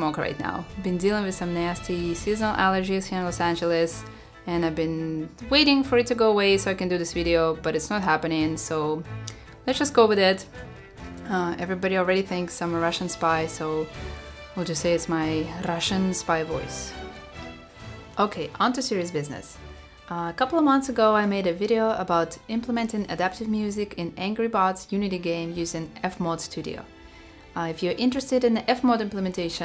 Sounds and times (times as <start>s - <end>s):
Speech: 0.0s - 9.0s, 9.7s - 10.5s, 11.2s - 13.9s, 14.6s - 16.9s, 18.2s - 26.9s, 27.6s - 29.6s
Music: 0.0s - 29.6s.